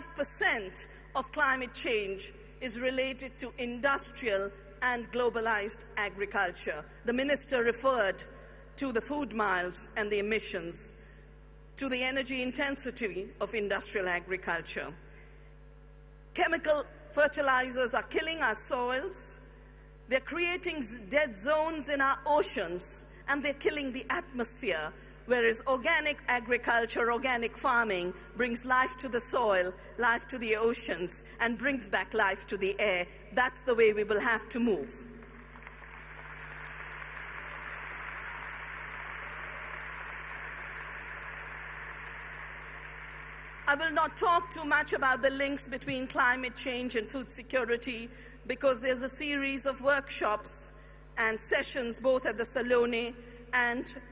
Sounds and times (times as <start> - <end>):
Female speech, woman speaking: 0.0 - 10.9, 11.8 - 15.0, 16.4 - 19.4, 20.1 - 35.0, 43.7 - 54.0.